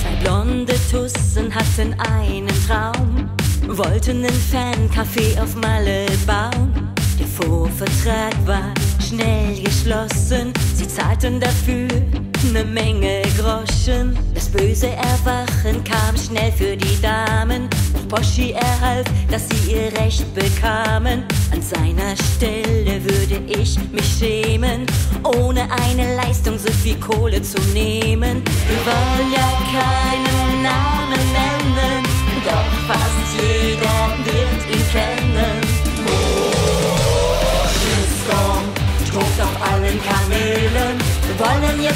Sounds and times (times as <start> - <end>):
Music: 0.0 - 41.9.